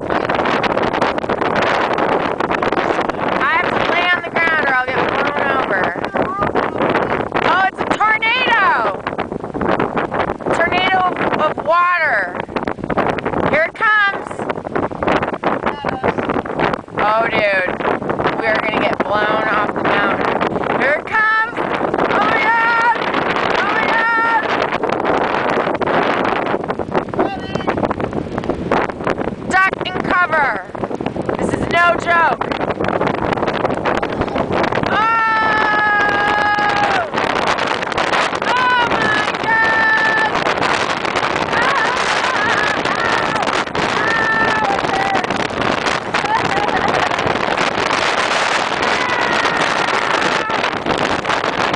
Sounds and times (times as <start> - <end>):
Wind noise (microphone): 0.0 - 51.7
Speech: 15.7 - 16.2, 27.2 - 27.8, 31.4 - 32.4, 46.2 - 47.2.